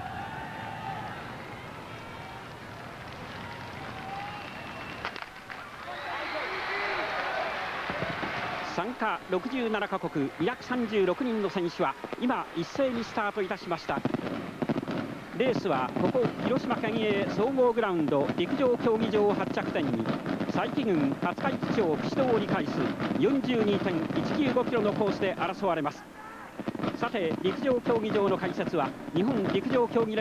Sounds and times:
Run: 0.0s - 16.2s
Speech: 8.7s - 14.1s, 15.4s - 30.2s.

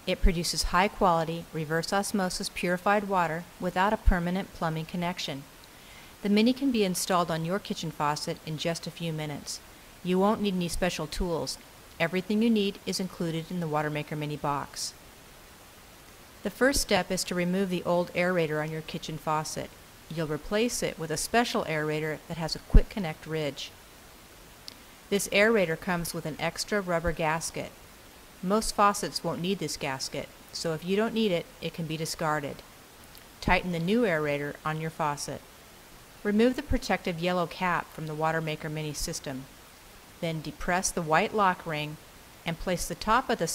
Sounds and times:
Speech: 0.1s - 5.5s, 6.2s - 15.0s, 16.4s - 23.7s, 25.1s - 27.8s, 28.4s - 32.6s, 33.4s - 35.4s, 36.3s - 39.5s, 40.2s - 43.5s.

